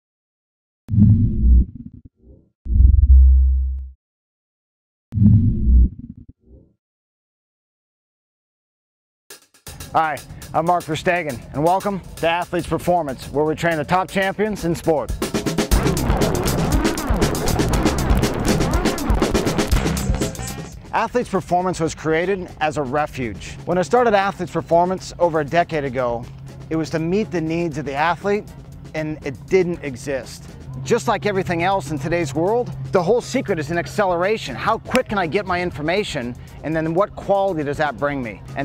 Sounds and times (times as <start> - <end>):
Music: 9.3 - 38.6
Outside, urban or manmade: 9.3 - 38.6.